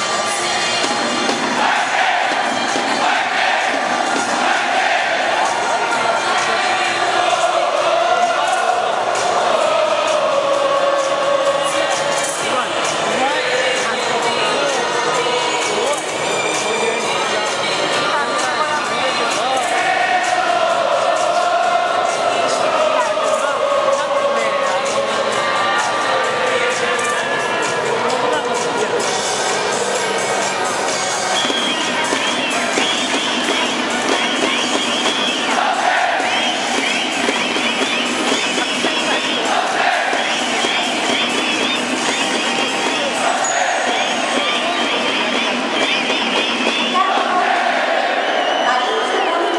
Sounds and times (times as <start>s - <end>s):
Music: 0.0s - 49.5s.